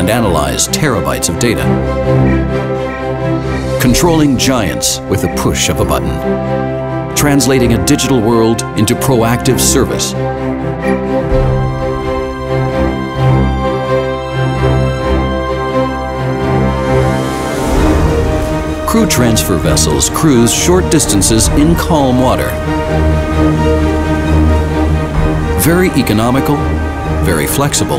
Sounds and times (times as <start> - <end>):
Speech: 0.0 - 1.8, 3.8 - 6.3, 7.2 - 10.2, 18.9 - 22.6, 25.6 - 26.6, 27.2 - 27.9
Music: 0.0 - 27.9.